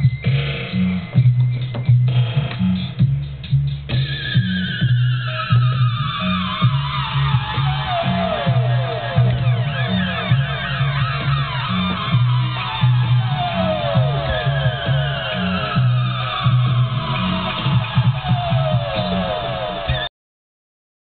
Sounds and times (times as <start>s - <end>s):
Music: 0.0s - 20.1s
Siren: 4.1s - 20.1s.